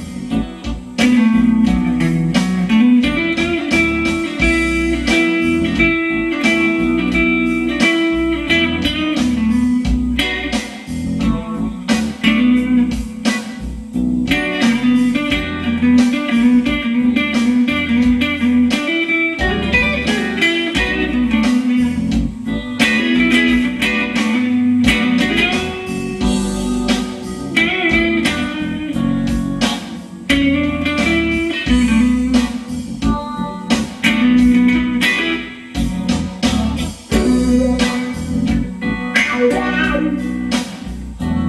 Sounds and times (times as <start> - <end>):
Electronic organ: 0.0 - 41.4
Guitar: 0.0 - 41.4.